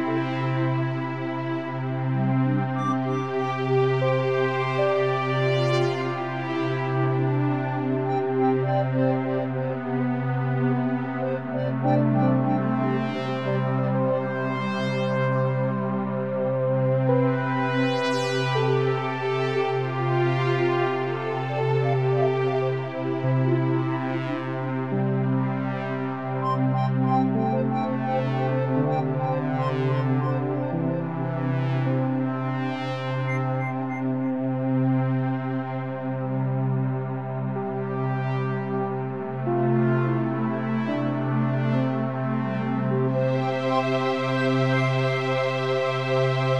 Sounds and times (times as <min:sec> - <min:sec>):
Synthesizer: 0:00.0 - 0:46.5.